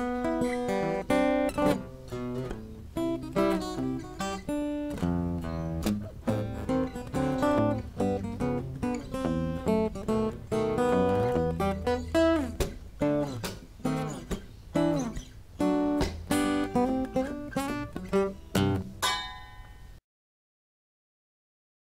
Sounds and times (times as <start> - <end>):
Electric guitar: 0.0 - 19.9
Acoustic guitar: 0.0 - 20.0
Strum: 0.0 - 20.0.